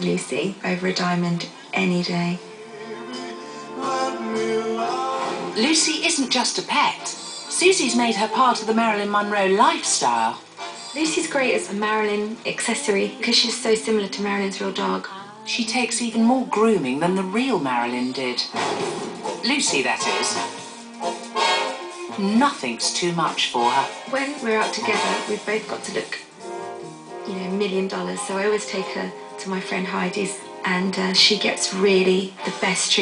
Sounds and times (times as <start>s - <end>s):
Speech: 0.0s - 2.4s, 5.6s - 10.4s, 11.0s - 18.5s, 19.4s - 20.5s, 22.1s - 26.3s, 27.3s - 33.0s
Music: 0.0s - 33.0s.